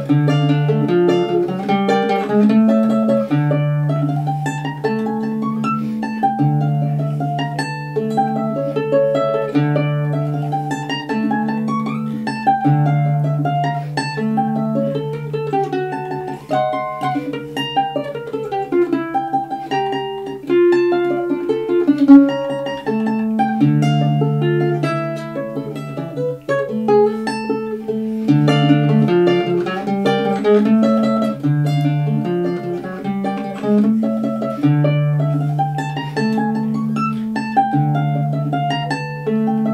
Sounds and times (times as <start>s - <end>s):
Acoustic guitar: 0.0s - 39.7s
Strum: 0.0s - 39.7s.